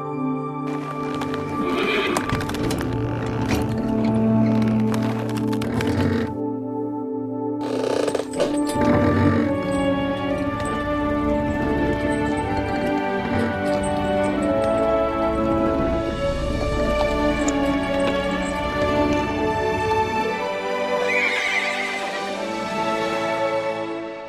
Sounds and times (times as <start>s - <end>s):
Music: 0.0s - 24.2s
Horse: 0.7s - 6.4s, 7.6s - 22.2s.